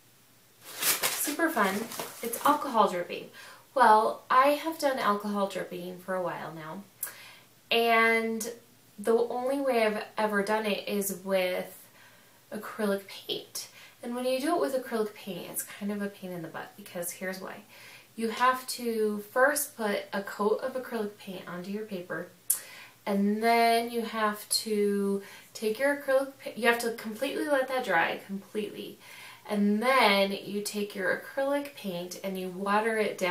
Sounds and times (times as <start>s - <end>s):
Speech: 1.2s - 6.9s, 7.7s - 11.8s, 12.5s - 22.3s, 23.1s - 33.3s.